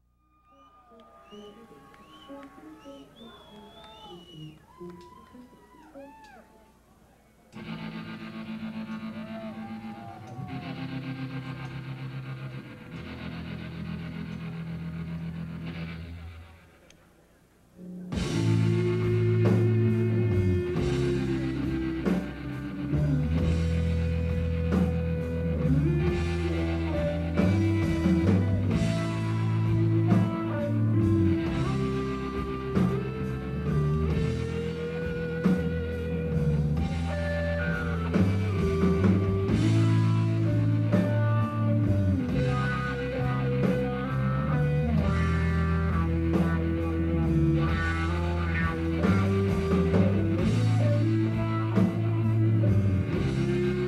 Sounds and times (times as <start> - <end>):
Drum kit: 18.0 - 53.8
Bass drum: 18.2 - 53.8.